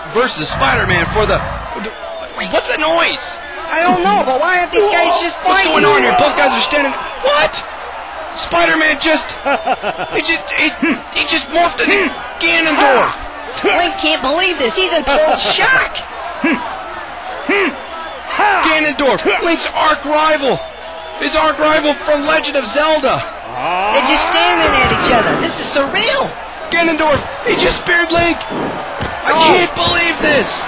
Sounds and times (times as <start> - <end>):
Speech: 0.0 - 9.4, 10.1 - 16.8, 17.4 - 28.5, 29.2 - 30.6.